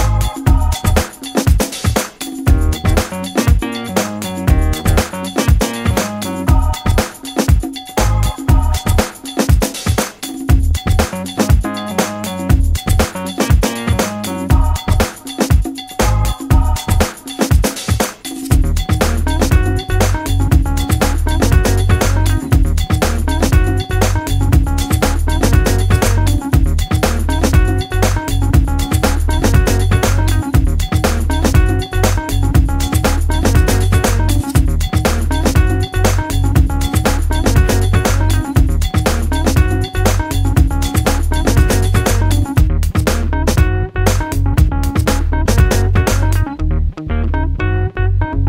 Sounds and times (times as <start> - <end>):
Pop music: 0.0 - 46.5.